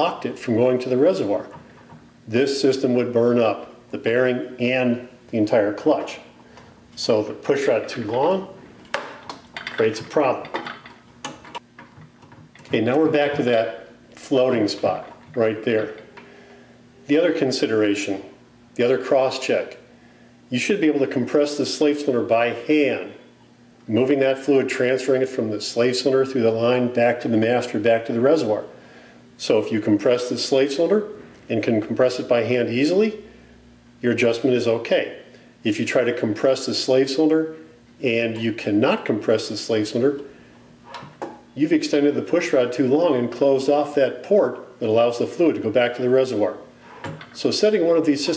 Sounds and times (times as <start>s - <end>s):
Speech: 0.0s - 1.6s, 2.3s - 6.4s, 7.0s - 8.6s, 9.7s - 10.6s, 12.7s - 16.0s, 17.1s - 19.9s, 20.5s - 23.2s, 23.9s - 28.7s, 29.4s - 33.3s, 34.0s - 40.3s, 41.6s - 46.7s, 47.4s - 48.3s
Inside, small room: 0.0s - 48.3s.